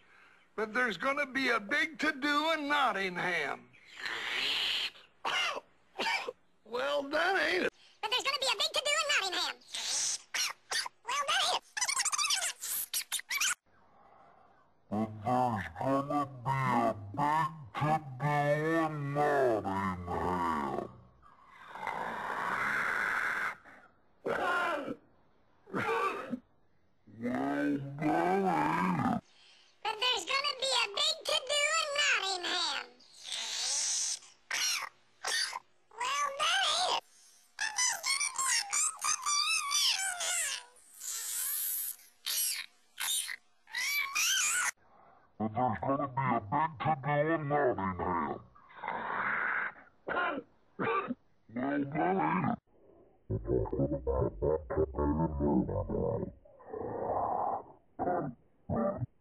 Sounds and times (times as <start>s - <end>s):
Speech: 6.7s - 9.6s, 14.9s - 20.9s, 27.2s - 29.2s, 29.9s - 33.0s, 45.4s - 48.4s, 51.6s - 52.6s, 53.4s - 56.2s.